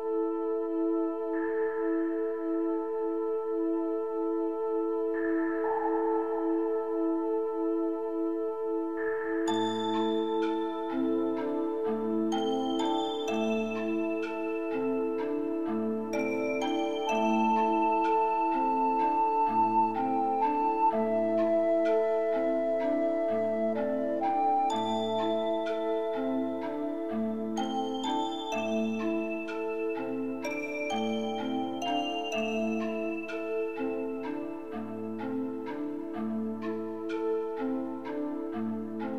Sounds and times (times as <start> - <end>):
Music: 0.0 - 39.1.